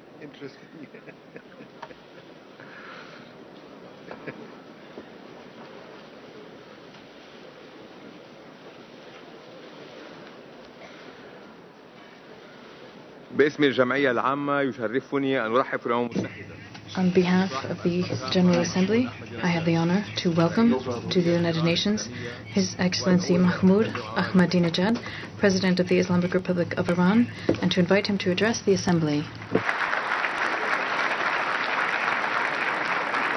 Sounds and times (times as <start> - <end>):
Male speech, man speaking: 0.2 - 0.7, 13.3 - 16.7, 17.3 - 24.8
Female speech, woman speaking: 17.0 - 29.4.